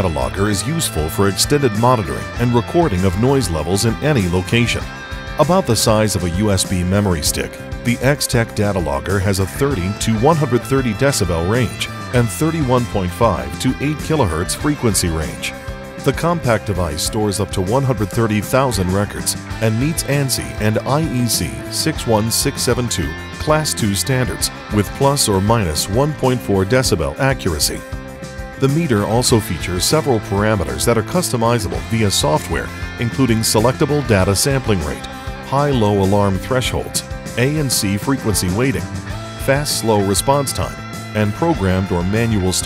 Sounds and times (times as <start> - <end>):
Speech: 0.0 - 27.8, 28.6 - 42.6
Music: 0.0 - 42.6.